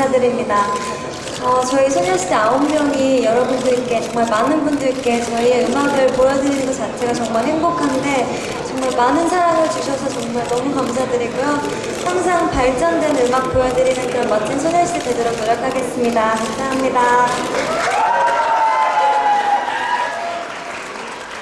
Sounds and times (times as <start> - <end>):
Speech: 0.0 - 17.4.